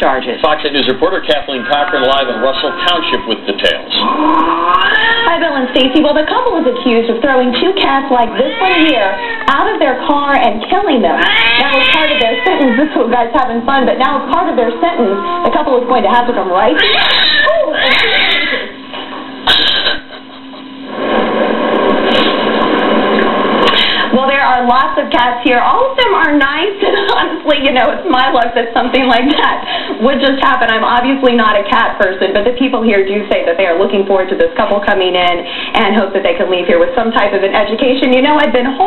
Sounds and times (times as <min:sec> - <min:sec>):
Speech: 0:24.2 - 0:38.8.